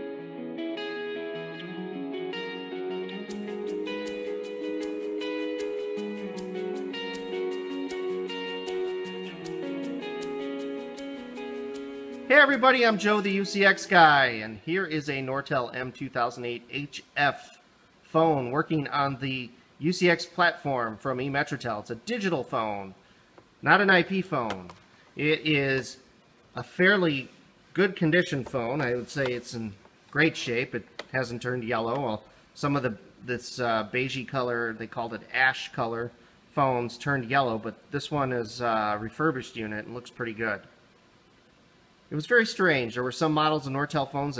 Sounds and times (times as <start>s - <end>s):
Speech: 12.3s - 23.0s, 23.6s - 40.8s, 42.1s - 44.3s.